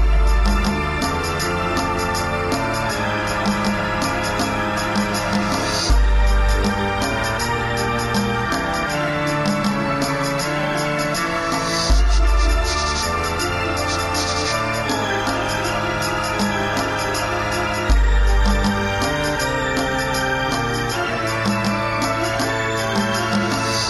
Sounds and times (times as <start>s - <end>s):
Electronic organ: 0.0s - 23.9s.